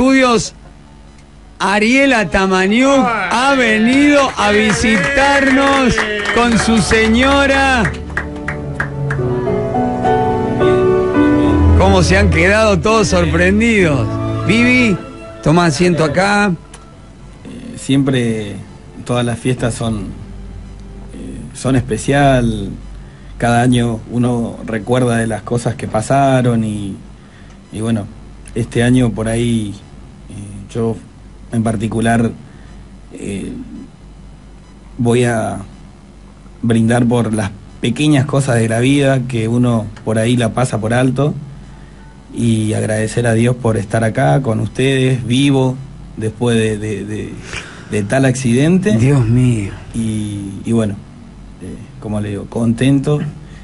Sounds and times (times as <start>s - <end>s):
Speech: 0.0s - 0.6s, 1.6s - 7.9s, 11.8s - 16.6s, 17.5s - 20.2s, 21.1s - 22.8s, 23.4s - 27.0s, 27.7s - 32.4s, 33.1s - 33.9s, 35.0s - 35.7s, 36.6s - 41.4s, 42.3s - 53.4s.